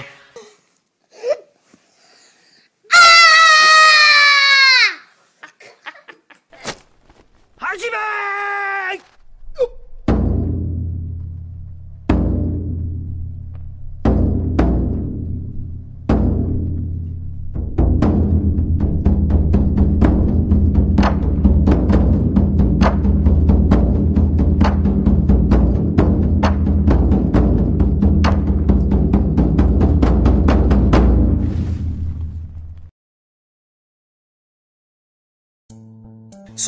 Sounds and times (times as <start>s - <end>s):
Speech: 7.6s - 9.8s
Timpani: 9.2s - 32.8s.